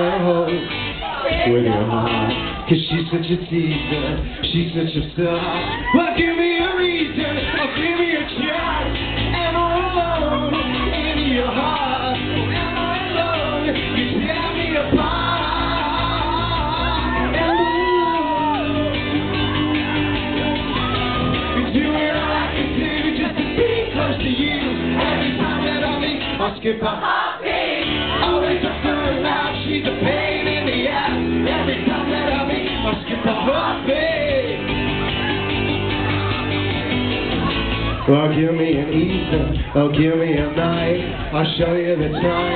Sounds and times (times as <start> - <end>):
Music: 0.0 - 42.5.